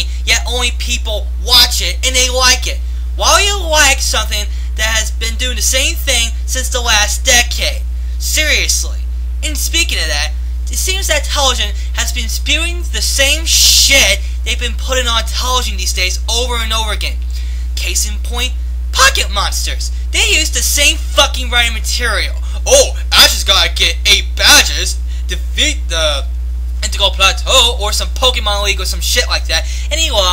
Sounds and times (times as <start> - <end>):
Speech: 0.0 - 30.3.